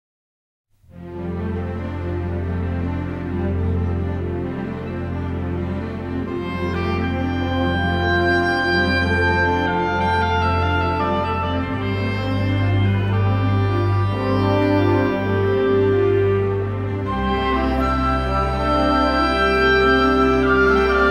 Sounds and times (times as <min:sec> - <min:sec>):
Background music: 0:00.8 - 0:21.1
Theme music: 0:00.9 - 0:21.1.